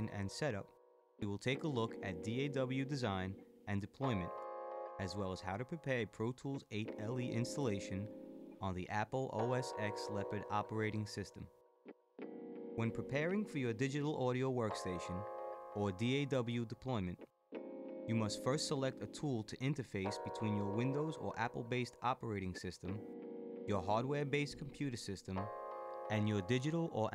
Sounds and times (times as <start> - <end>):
Speech: 0.0 - 4.4, 5.0 - 11.5, 12.8 - 15.2, 15.8 - 17.2, 18.1 - 23.0, 23.7 - 25.5, 26.1 - 27.1
Music: 0.0 - 27.1.